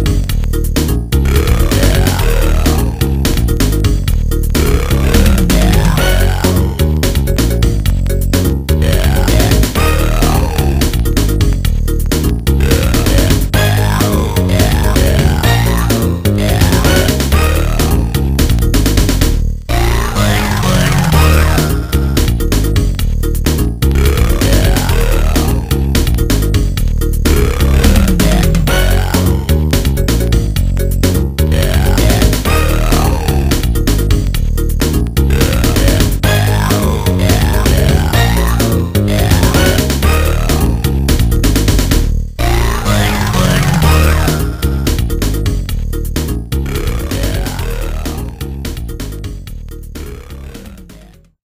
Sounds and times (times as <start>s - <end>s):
Disco: 0.0s - 51.2s
Dance music: 0.0s - 51.4s.